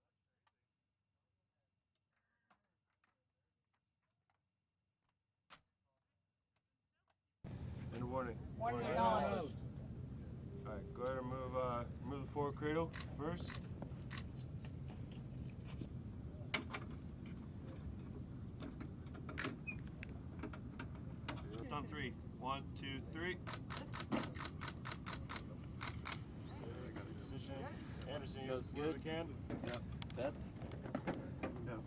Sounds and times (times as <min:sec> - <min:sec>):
Outside, urban or manmade: 0:02.0 - 0:31.8.